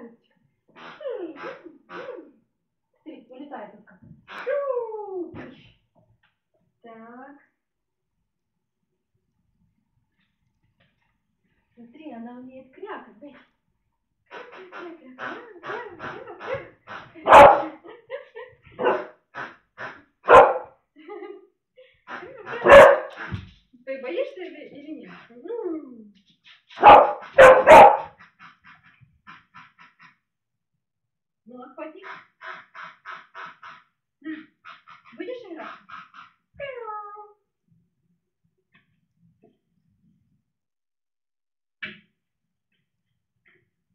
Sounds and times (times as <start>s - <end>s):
Speech: 0.0s - 0.3s, 1.0s - 2.3s, 3.0s - 5.8s, 6.8s - 7.6s, 11.8s - 13.5s, 14.4s - 17.8s, 23.8s - 26.2s, 31.5s - 32.1s, 35.2s - 35.8s, 36.6s - 37.4s.